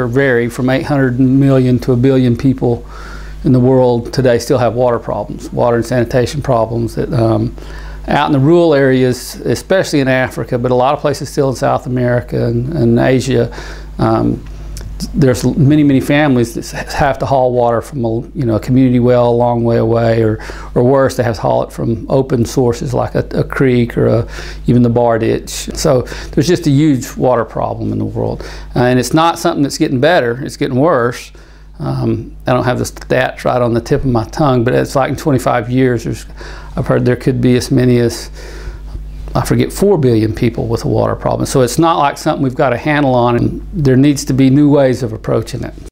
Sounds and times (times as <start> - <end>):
Speech: 0.0 - 38.4, 39.4 - 45.9.